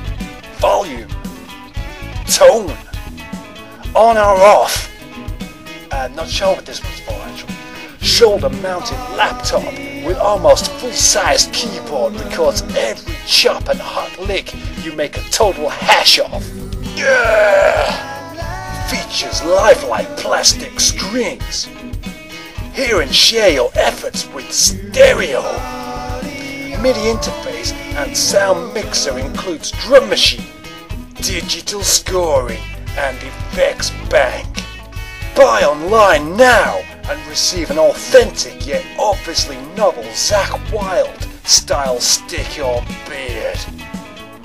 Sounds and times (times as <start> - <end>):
Speech: 0.6 - 1.2, 2.3 - 2.8, 3.9 - 4.9, 5.9 - 18.1, 18.8 - 21.7, 22.8 - 25.7, 26.7 - 30.5, 31.2 - 34.6, 35.4 - 43.7.